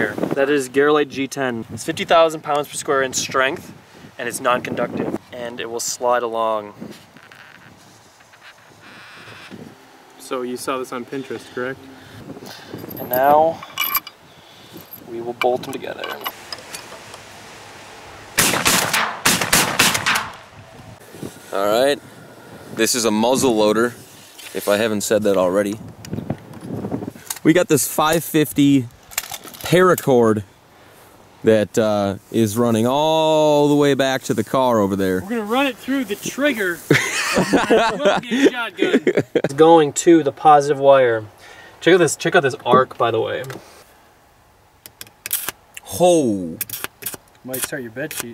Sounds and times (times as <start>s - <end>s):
Speech: 0.0s - 6.8s, 10.2s - 11.8s, 15.1s - 16.3s, 22.8s - 25.8s, 27.4s - 28.9s, 29.6s - 30.4s, 31.4s - 36.9s, 37.9s - 43.6s, 45.8s - 46.6s, 47.4s - 48.3s.